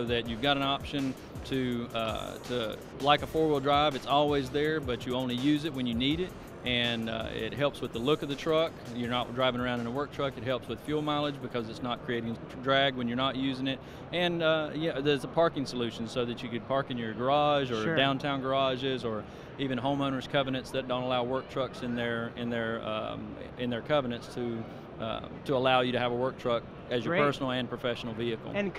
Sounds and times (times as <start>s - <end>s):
Speech: 0.0s - 28.7s.